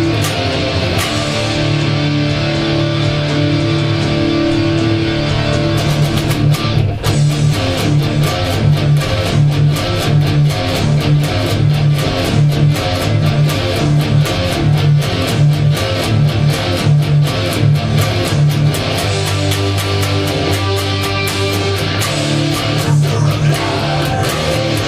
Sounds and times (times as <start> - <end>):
Electric guitar: 0.0 - 24.8.